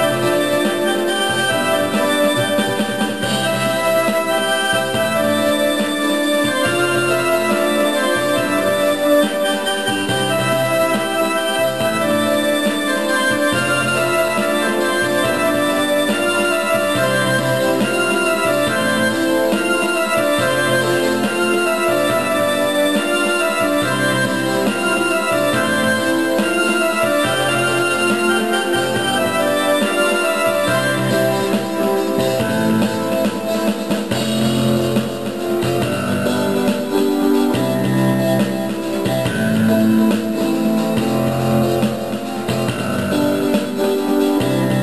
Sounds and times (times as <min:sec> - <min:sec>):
Theme music: 0:00.0 - 0:44.8
Traditional music: 0:00.0 - 0:44.8.